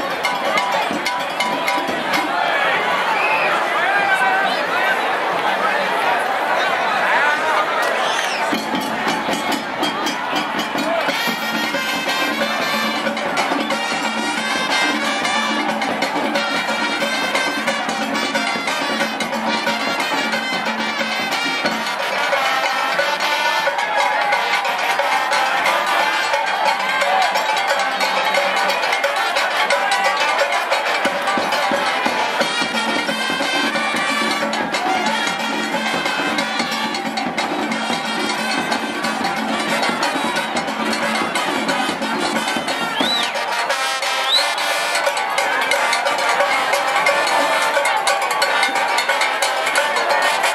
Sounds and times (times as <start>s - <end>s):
Music: 0.0s - 3.4s, 8.2s - 50.5s.